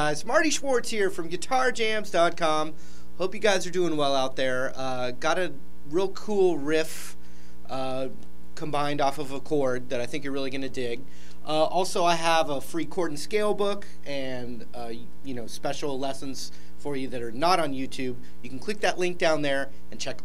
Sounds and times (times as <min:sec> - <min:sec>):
Speech: 0:00.0 - 0:20.2.